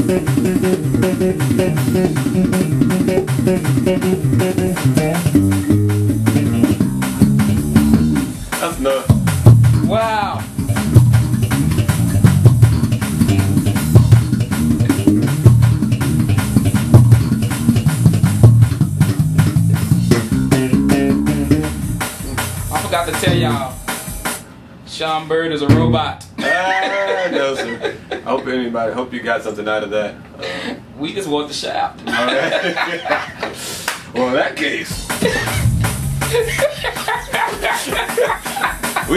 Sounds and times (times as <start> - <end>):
Bass guitar: 0.0 - 23.8, 25.7 - 26.3, 35.0 - 37.0
Speech: 8.6 - 9.1, 9.9 - 10.5, 22.7 - 23.8, 24.9 - 26.3, 27.0 - 30.2, 31.0 - 32.4, 34.2 - 35.1.